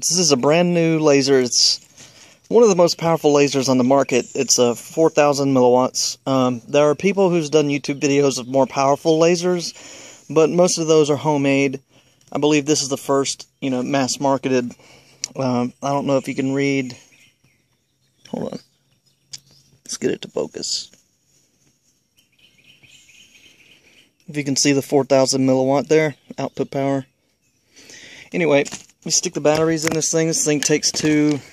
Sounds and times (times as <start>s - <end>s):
Chirp, tweet: 13.4s - 21.4s, 22.0s - 28.2s.